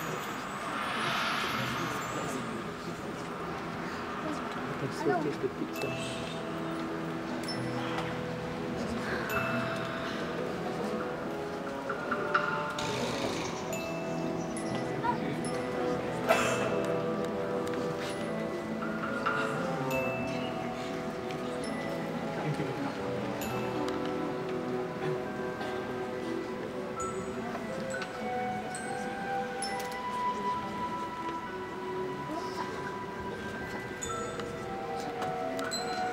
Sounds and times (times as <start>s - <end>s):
Orchestra: 0.0s - 36.1s.